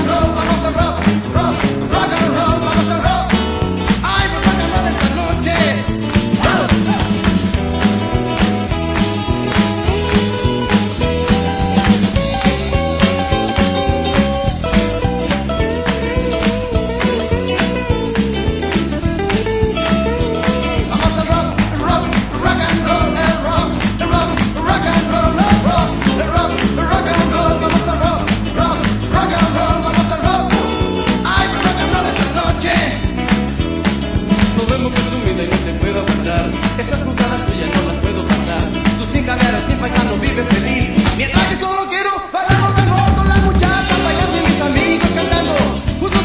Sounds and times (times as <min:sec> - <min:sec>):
Rock and roll: 0:00.0 - 0:46.2.